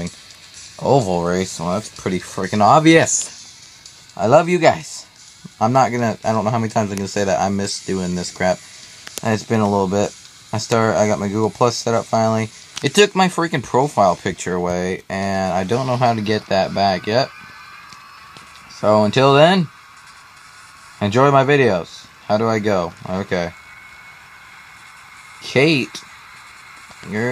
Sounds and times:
Music: 0.0 - 27.3
Speech: 0.8 - 3.4, 4.2 - 8.6, 9.2 - 17.3, 18.7 - 19.7, 21.0 - 23.6, 25.4 - 26.0, 27.0 - 27.3.

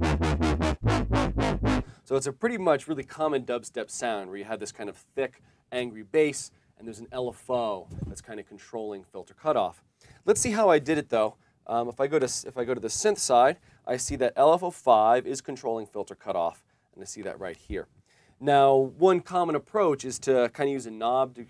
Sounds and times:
Speech: 2.1 - 21.4.

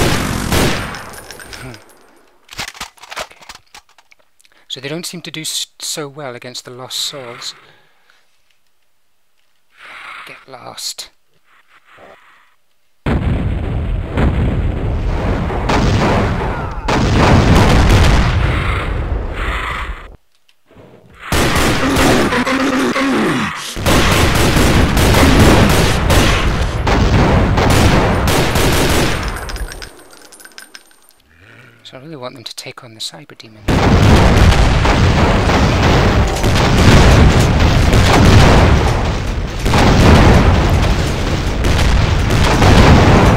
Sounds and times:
Speech: 4.7 - 7.7, 10.3 - 11.2, 31.8 - 33.7.

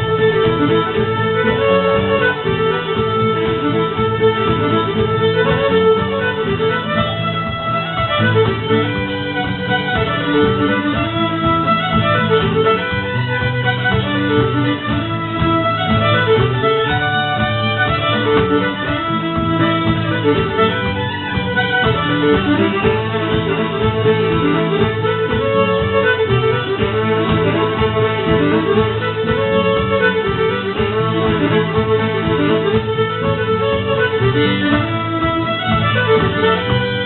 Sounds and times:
Violin, fiddle: 0.0 - 37.0.

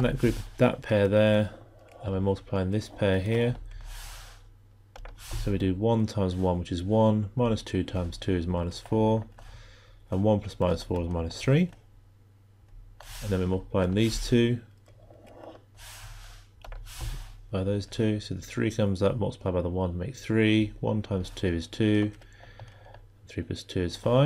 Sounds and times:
Speech: 0.0 - 3.6, 5.4 - 9.3, 10.1 - 11.8, 13.2 - 14.7, 17.5 - 22.2, 23.3 - 24.2.

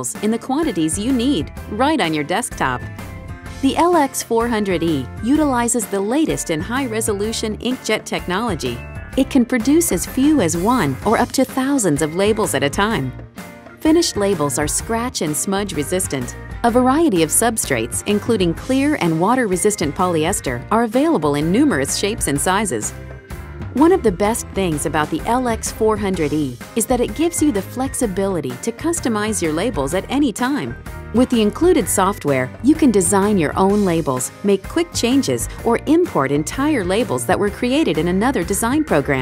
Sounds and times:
Speech: 0.0 - 2.8, 3.6 - 13.1, 13.8 - 22.9, 23.8 - 39.2
Music: 0.0 - 39.2.

